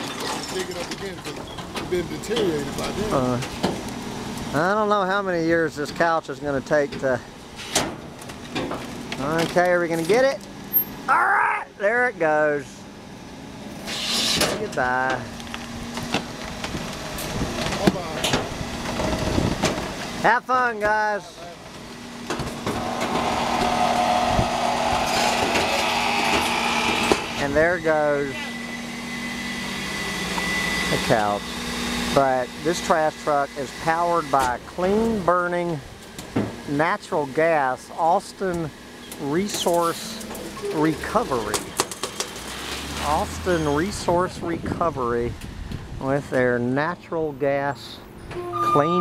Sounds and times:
Truck: 0.0 - 49.0
Speech: 0.3 - 3.5, 4.5 - 7.2, 9.2 - 10.4, 11.1 - 12.8, 14.5 - 15.3, 17.7 - 18.3, 20.2 - 21.6, 27.4 - 28.5, 30.9 - 31.4, 32.2 - 35.8, 36.7 - 41.6, 43.0 - 45.3, 46.0 - 48.0, 48.6 - 49.0.

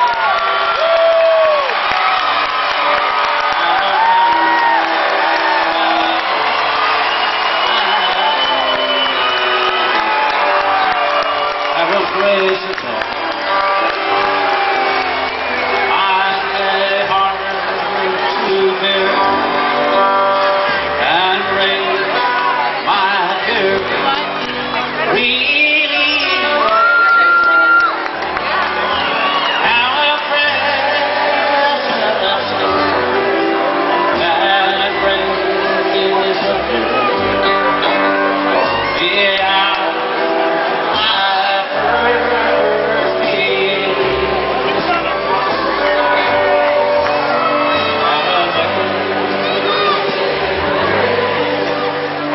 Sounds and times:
Music: 0.0 - 52.3
Male singing: 15.9 - 24.4, 25.0 - 27.7, 29.6 - 33.3, 33.9 - 40.2, 40.8 - 45.1, 47.7 - 52.3.

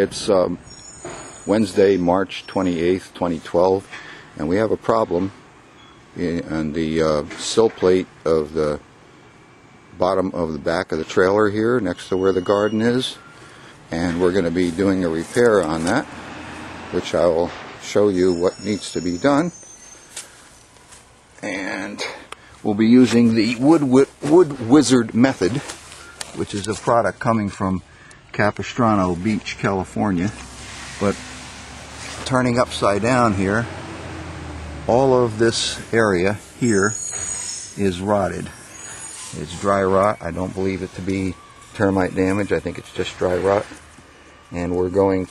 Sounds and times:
Speech: 0.0 - 0.6, 1.5 - 5.4, 6.2 - 8.9, 10.0 - 13.2, 13.9 - 16.1, 16.9 - 19.6, 21.4 - 30.4, 31.0 - 31.2, 32.2 - 33.7, 34.9 - 37.0, 37.8 - 38.6, 39.3 - 43.8, 44.5 - 45.3.

